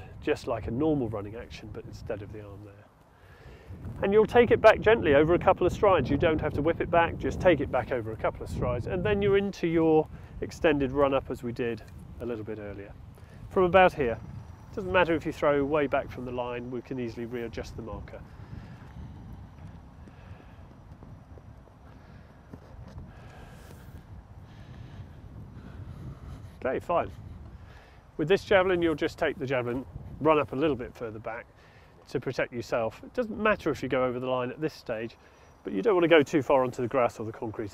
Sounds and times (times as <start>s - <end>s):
Speech: 0.0s - 2.9s, 4.0s - 14.2s, 14.8s - 18.2s, 26.6s - 27.2s, 28.2s - 31.5s, 32.1s - 37.7s.